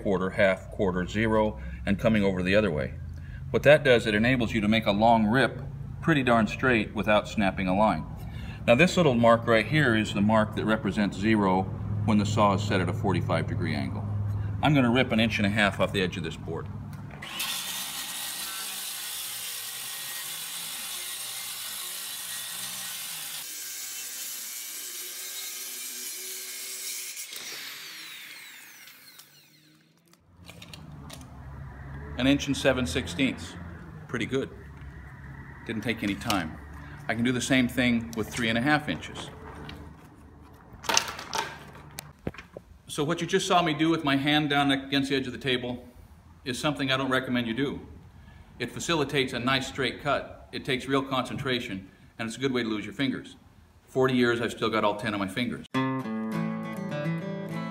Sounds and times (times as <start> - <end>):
Speech: 0.0 - 3.0, 3.6 - 8.1, 8.7 - 14.0, 14.6 - 16.7, 32.2 - 34.6, 35.7 - 39.3, 42.9 - 45.9, 46.5 - 48.0, 48.6 - 55.7.